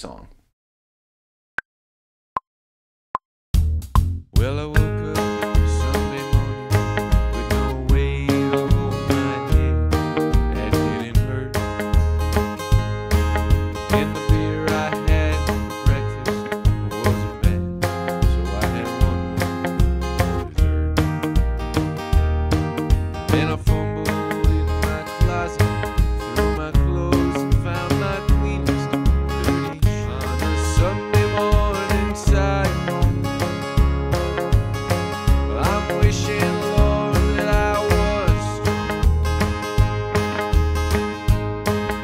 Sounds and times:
Strum: 0:04.0 - 0:42.0.

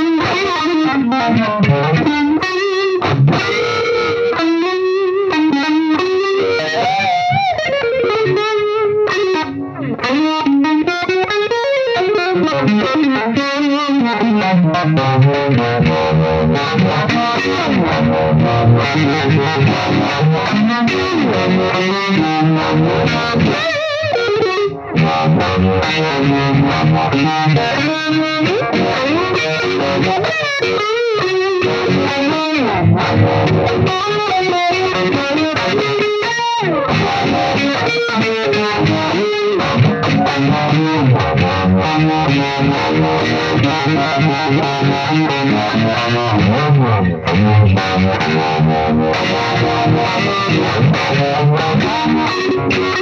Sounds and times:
Effects unit: 0:00.0 - 0:53.0
Guitar: 0:00.0 - 0:53.0.

